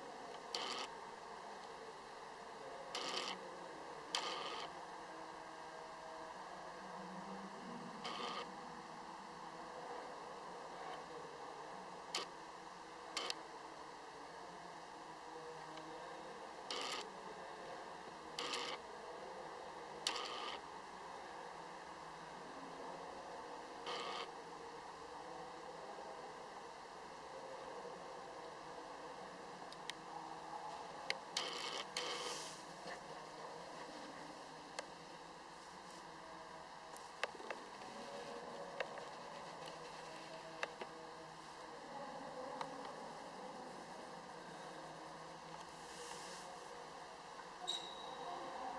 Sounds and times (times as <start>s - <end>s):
White noise: 0.0s - 48.7s.